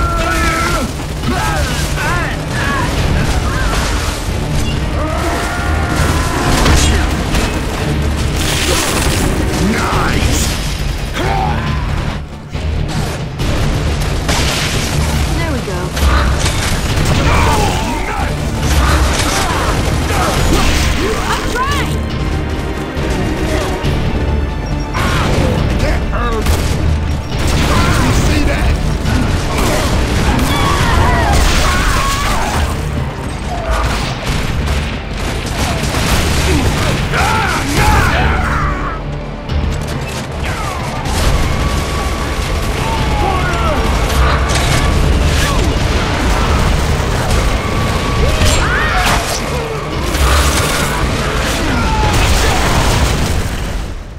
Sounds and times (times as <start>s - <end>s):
Music: 0.0s - 54.1s.